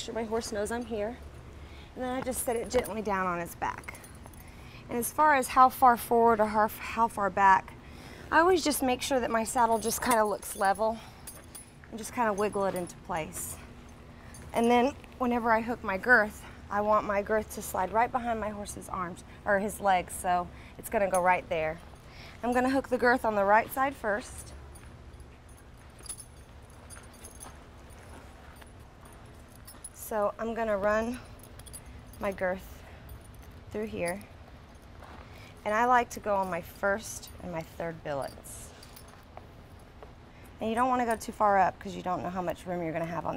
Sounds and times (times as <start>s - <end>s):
Speech: 2.0s - 3.9s, 40.6s - 43.3s.